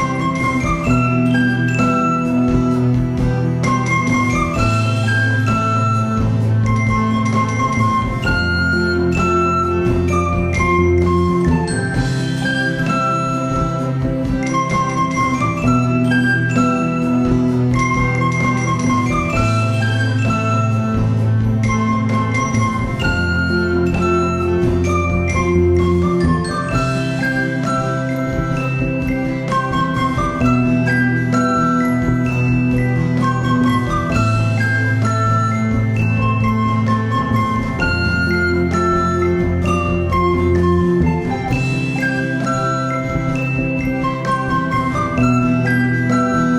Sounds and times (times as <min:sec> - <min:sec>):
Flute: 0:00.0 - 0:46.5.